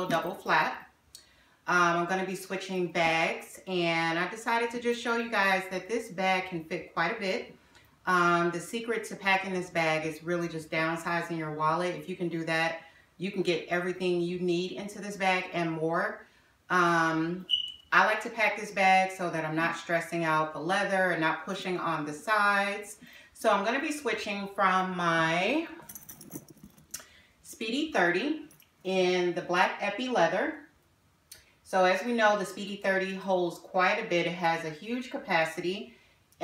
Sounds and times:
Speech: 0.0s - 0.8s, 1.7s - 7.5s, 8.1s - 25.8s, 27.5s - 30.7s, 31.7s - 35.9s.

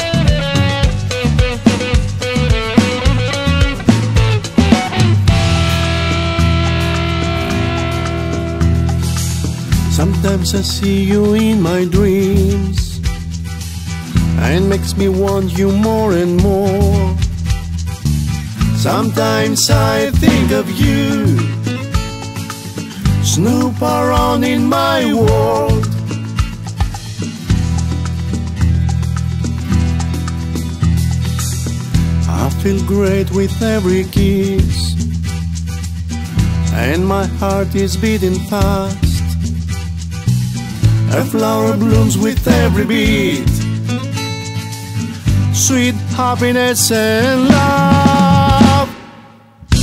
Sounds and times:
Strum: 0.0s - 11.0s, 15.9s - 32.3s, 47.4s - 49.8s.

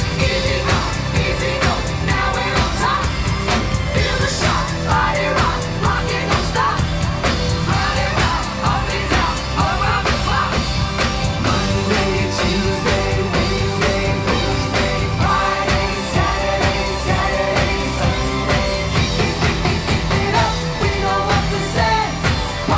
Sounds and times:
Inside, large room or hall: 0.0s - 22.7s
Inside, public space: 0.0s - 22.7s
Pop music: 0.0s - 22.7s
Singing: 0.0s - 22.7s.

